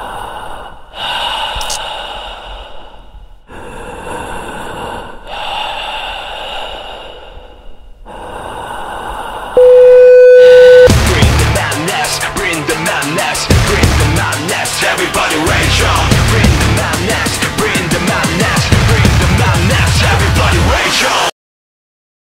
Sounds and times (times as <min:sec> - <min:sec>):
Music: 0:09.6 - 0:21.3.